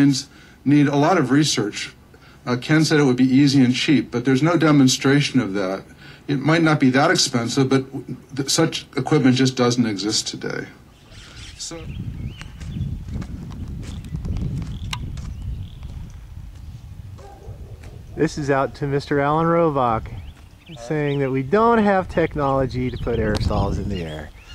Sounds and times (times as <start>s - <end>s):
Speech: 0.0s - 10.8s, 11.6s - 12.0s, 18.2s - 24.3s.